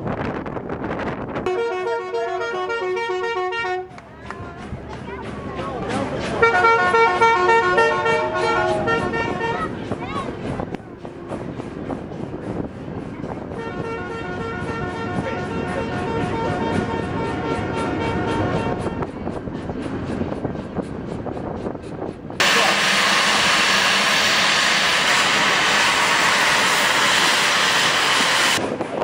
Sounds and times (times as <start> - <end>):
Railroad car, train wagon: 0.0 - 29.0
Train: 0.0 - 29.0.